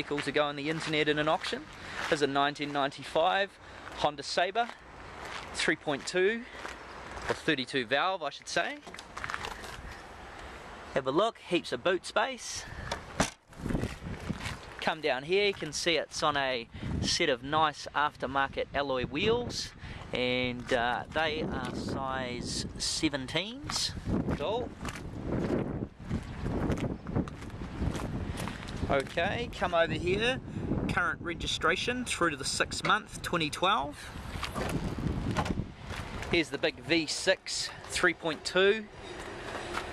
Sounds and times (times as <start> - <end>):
Speech: 0.0 - 4.8, 5.5 - 6.5, 7.3 - 8.9, 11.0 - 12.7, 14.8 - 24.7, 28.9 - 34.1, 36.3 - 38.9.